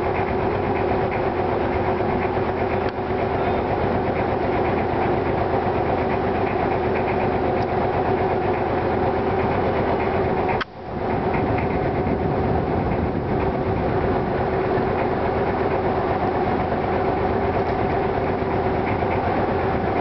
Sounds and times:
Motorboat, speedboat: 0:00.0 - 0:20.0.

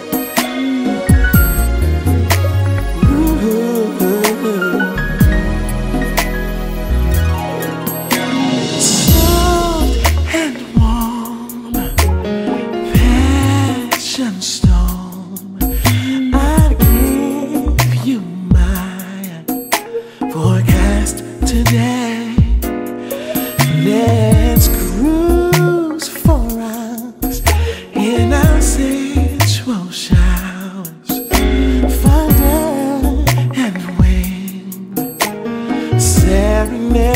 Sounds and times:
Music: 0:00.0 - 0:37.1.

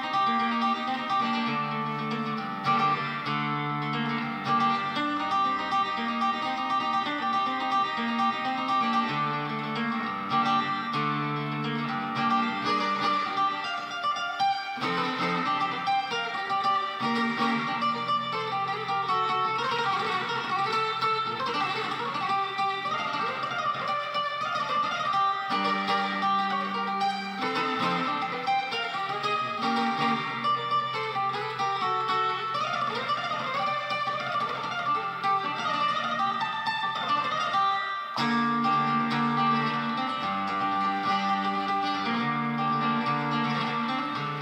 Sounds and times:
Acoustic guitar: 0:00.0 - 0:44.4
Strum: 0:00.0 - 0:44.4.

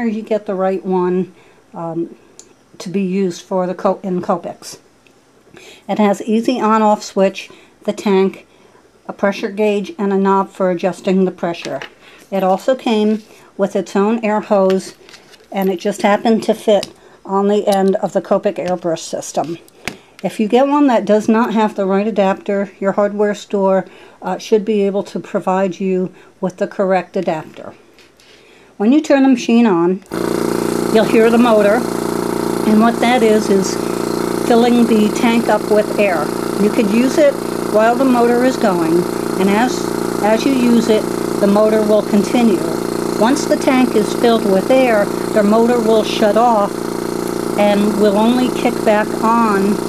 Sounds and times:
Sewing machine: 0:30.1 - 0:49.8.

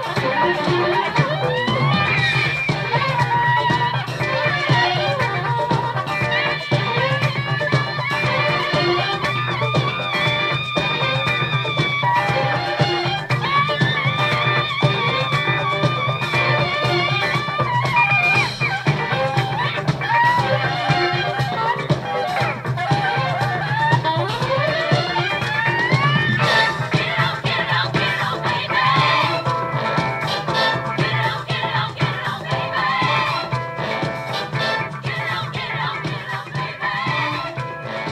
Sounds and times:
Saxophone: 0:00.0 - 0:38.1.

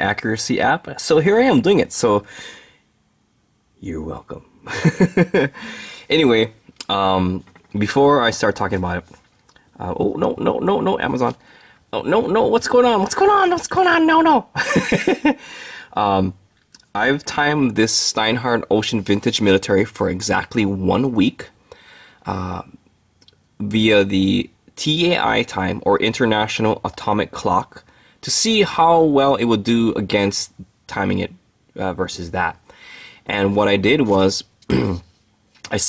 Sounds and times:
Speech: 0:00.0 - 0:02.3, 0:03.8 - 0:04.5, 0:06.1 - 0:09.2, 0:09.8 - 0:14.6, 0:16.0 - 0:21.6, 0:22.3 - 0:22.8, 0:23.6 - 0:32.6, 0:33.3 - 0:35.1, 0:35.7 - 0:35.8.

